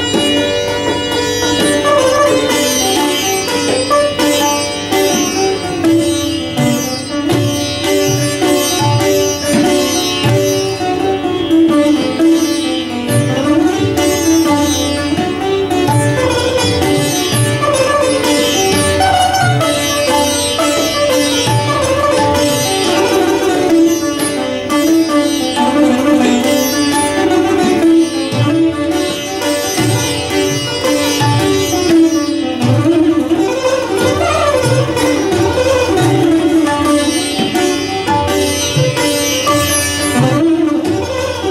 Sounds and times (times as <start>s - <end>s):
Tabla: 0.0s - 41.5s.